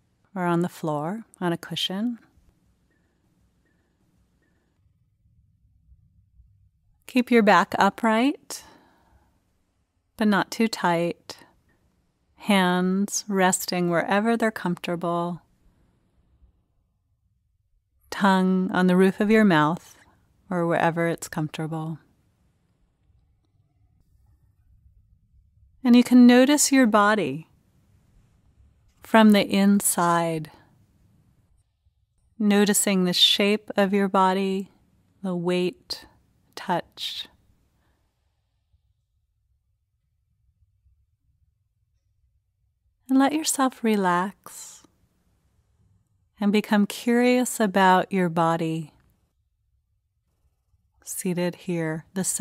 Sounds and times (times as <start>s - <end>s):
Speech: 0.4s - 2.3s, 7.1s - 8.8s, 10.2s - 11.4s, 12.4s - 15.4s, 18.2s - 22.0s, 25.9s - 27.4s, 29.0s - 30.6s, 32.4s - 37.3s, 43.1s - 44.9s, 46.4s - 49.0s, 51.1s - 52.4s.